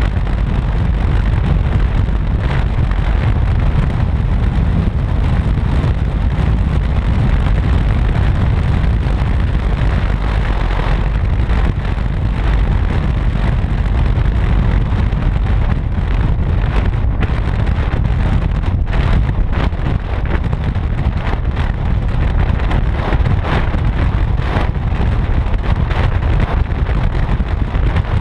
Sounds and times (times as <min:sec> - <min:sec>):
Vehicle: 0:00.0 - 0:28.2.